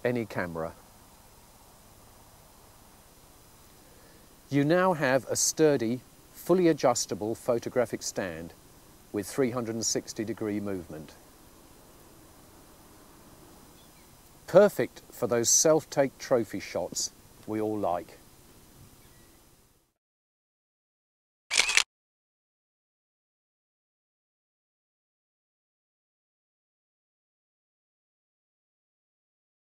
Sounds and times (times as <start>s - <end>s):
Speech: 0.0s - 0.8s, 4.5s - 8.6s, 9.2s - 11.2s, 14.5s - 18.2s
Single-lens reflex camera: 21.5s - 21.9s.